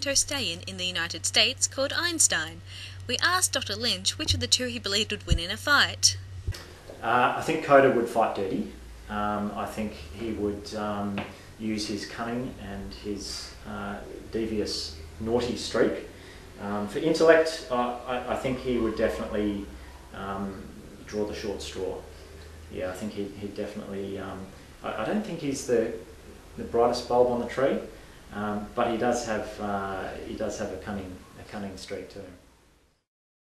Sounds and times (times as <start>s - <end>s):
Speech: 0.0s - 6.2s, 7.0s - 22.1s, 22.7s - 26.0s, 26.6s - 32.4s.